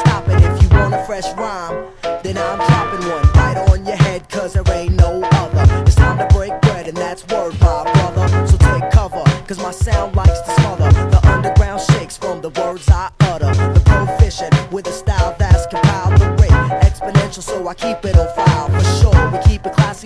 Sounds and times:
Music: 0.0 - 20.0.

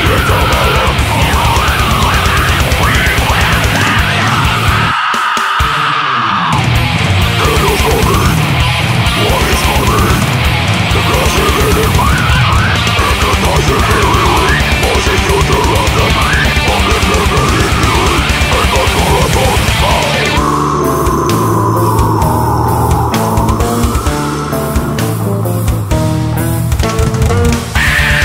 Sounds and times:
Music: 0.0 - 28.2.

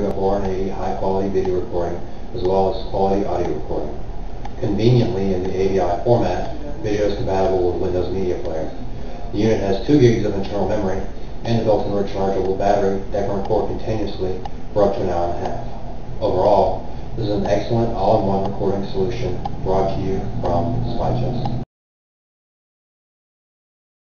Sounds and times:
Speech: 0.0 - 4.0, 4.6 - 21.6.

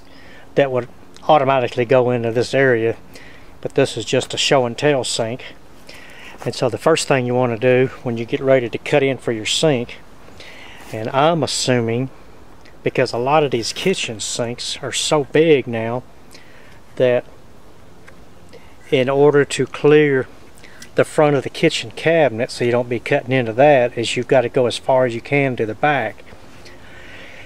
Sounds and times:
Speech: 0.6 - 3.0, 3.6 - 5.6, 6.4 - 10.0, 10.9 - 12.1, 12.8 - 16.0, 17.0 - 17.3, 18.9 - 20.3, 21.0 - 26.2.

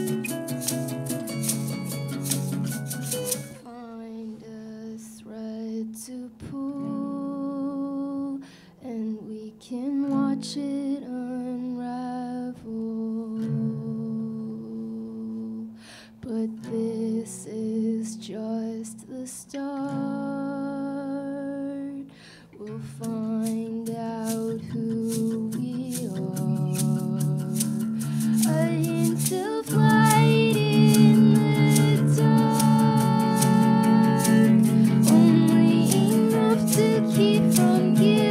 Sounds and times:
Music: 0.0 - 38.3.

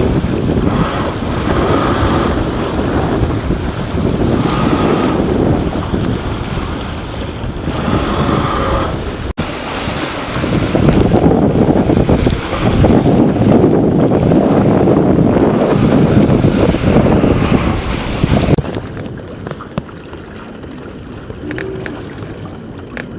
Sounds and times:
Sailboat, sailing ship: 0.0 - 23.1.

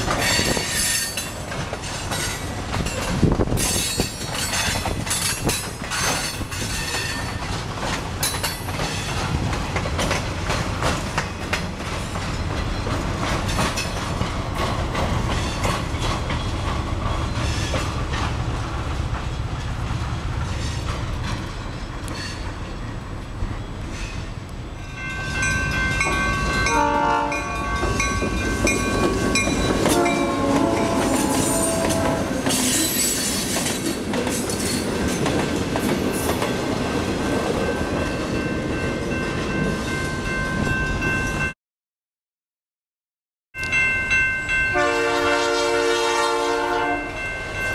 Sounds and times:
Railroad car, train wagon: 0.0 - 41.6, 43.6 - 47.7
Train horn: 26.3 - 28.1, 29.8 - 32.6, 44.7 - 47.3.

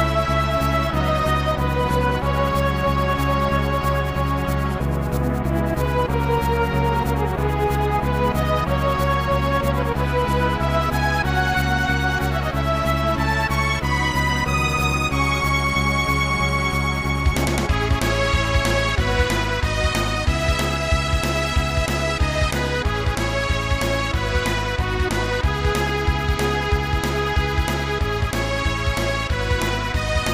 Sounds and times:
Background music: 0.0 - 30.3.

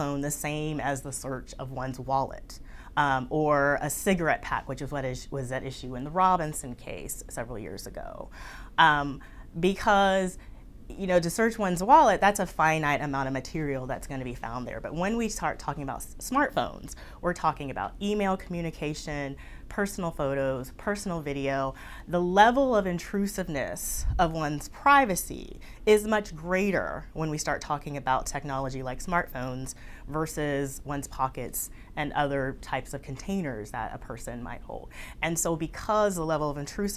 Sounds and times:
Inside, small room: 0.0 - 36.9
Speech: 0.0 - 36.9.

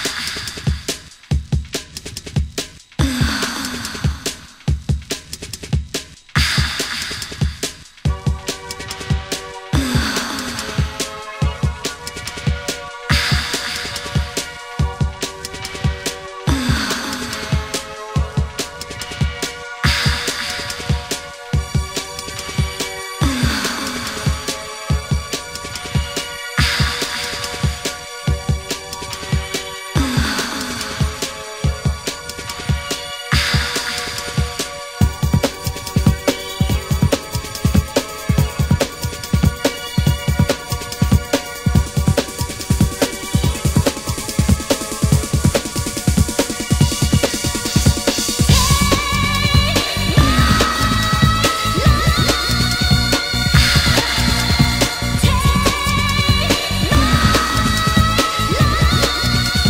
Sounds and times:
Techno: 0.0 - 59.7.

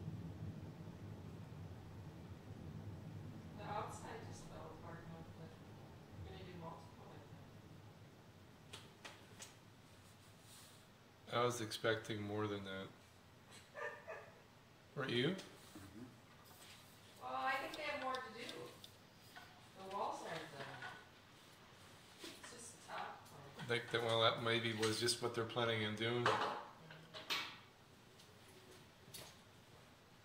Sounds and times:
Speech: 3.6 - 5.6, 17.2 - 18.8, 19.8 - 20.8, 22.5 - 26.4.

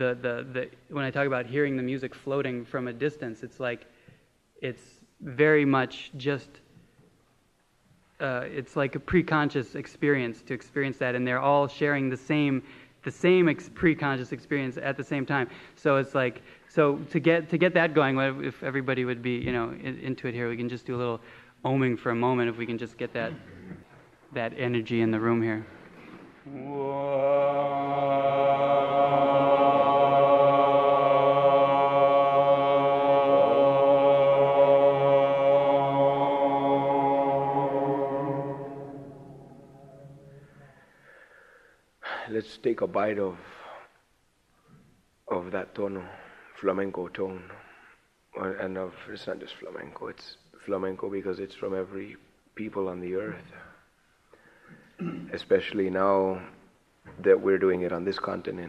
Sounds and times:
Speech: 0.0 - 3.8, 4.6 - 6.6, 8.2 - 25.7, 42.1 - 43.9, 45.3 - 47.6, 48.4 - 53.8, 55.0 - 58.6.

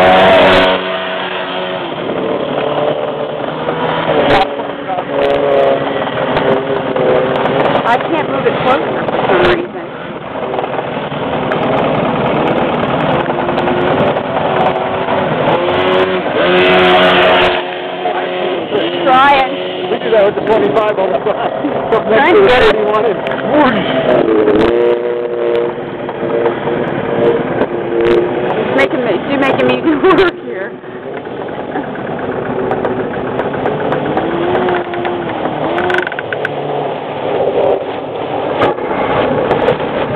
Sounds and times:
Boat, Water vehicle: 0.0 - 40.1.

